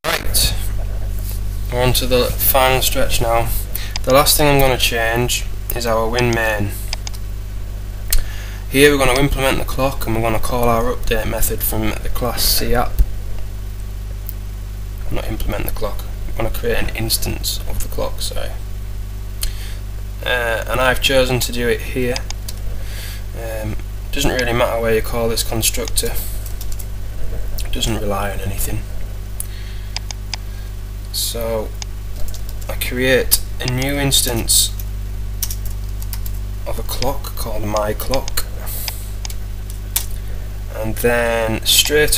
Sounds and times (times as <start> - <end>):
Speech: 0.0 - 0.8, 1.7 - 6.9, 8.7 - 13.0, 15.0 - 18.6, 20.2 - 22.3, 23.4 - 26.4, 27.6 - 28.9, 31.1 - 31.8, 32.7 - 34.8, 36.6 - 38.5, 40.7 - 42.1.